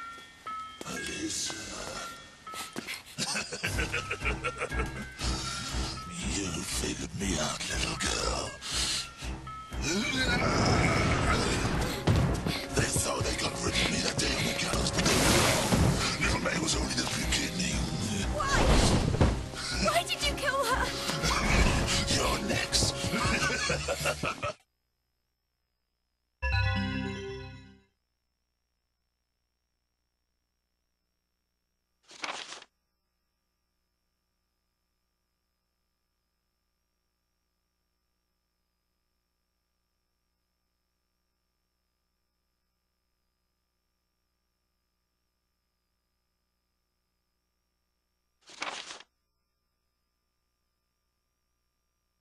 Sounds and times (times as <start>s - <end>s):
Music: 3.6s - 24.3s, 26.4s - 27.9s.